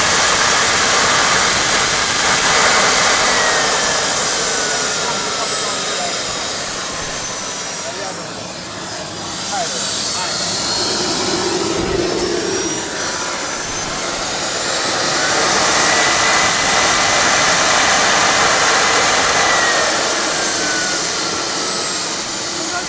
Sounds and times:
Aircraft: 0.0 - 22.8
Speech: 4.5 - 10.7, 13.6 - 14.3, 22.4 - 22.8.

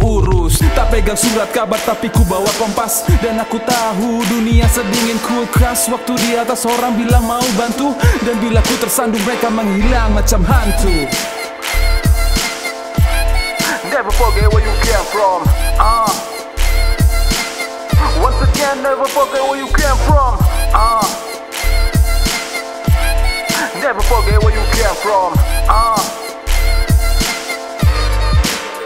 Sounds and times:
Rapping: 0.0 - 11.2, 13.4 - 17.0, 18.0 - 22.3, 23.0 - 27.0
Hip hop music: 0.0 - 28.8.

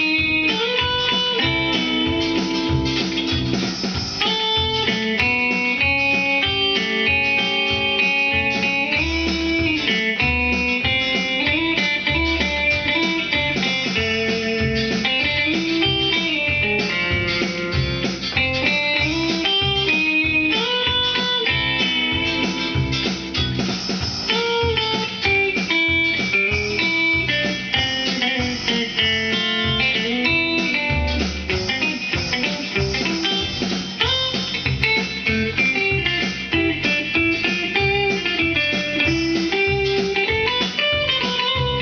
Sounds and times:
Electric guitar: 0.0 - 41.8.

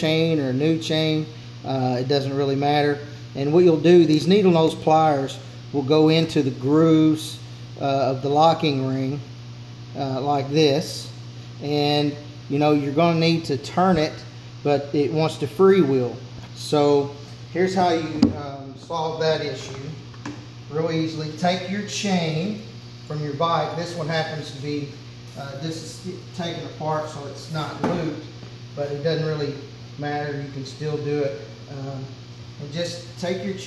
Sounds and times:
Speech: 0.0 - 9.2, 10.0 - 20.0, 20.7 - 33.6.

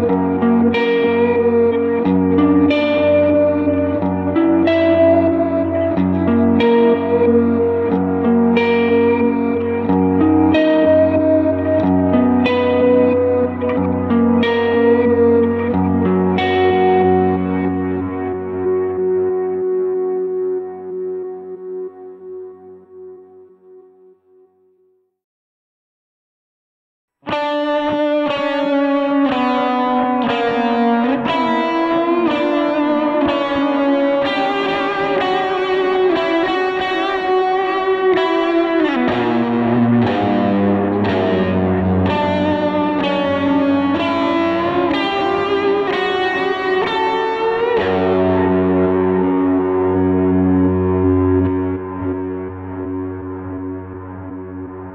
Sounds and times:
Music: 0.0 - 25.2, 27.1 - 54.9.

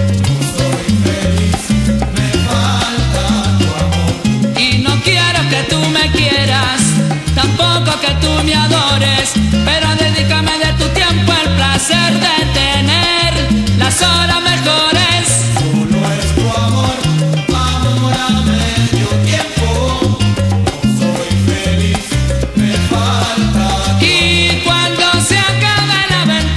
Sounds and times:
Salsa music: 0.0 - 26.5.

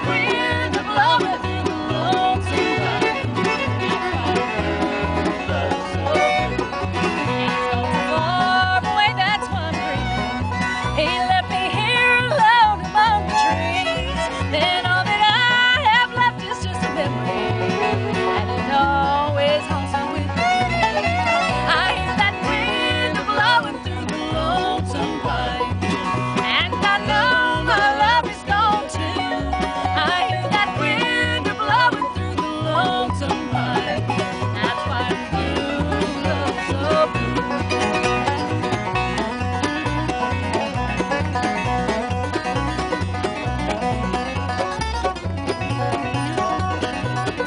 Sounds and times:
Blues: 0.0 - 47.4.

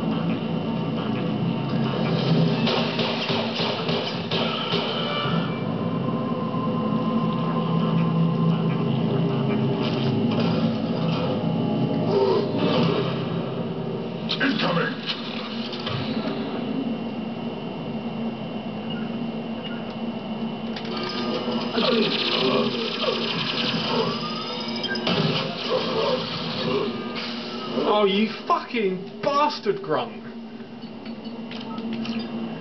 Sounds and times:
Speech: 27.8 - 30.3.

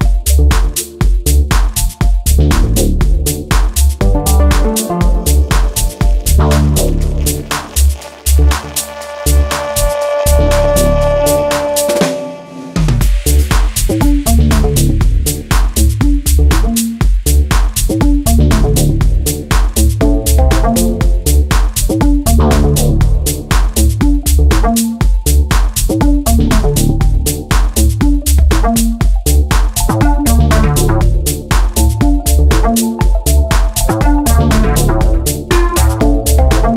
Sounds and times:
Drum roll: 0.0 - 36.7.

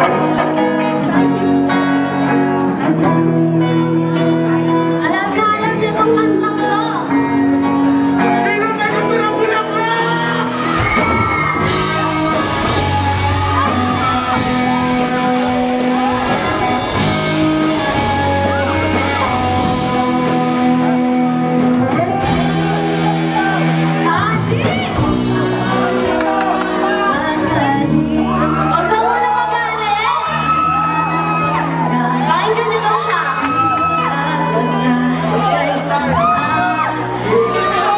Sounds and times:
Music: 0.0 - 37.9
Female singing: 24.0 - 37.9.

